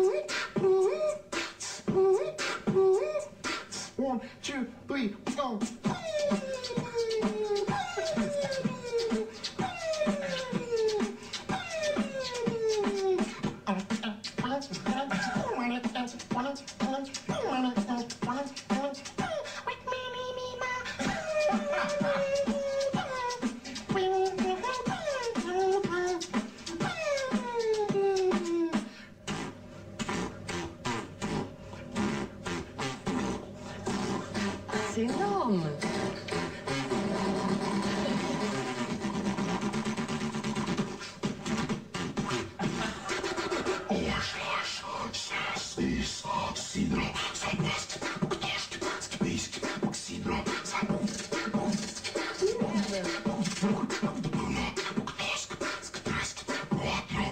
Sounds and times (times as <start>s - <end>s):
Beatboxing: 0.0s - 4.2s, 4.9s - 57.3s
Speech: 4.0s - 5.6s, 34.7s - 35.9s, 52.4s - 53.8s.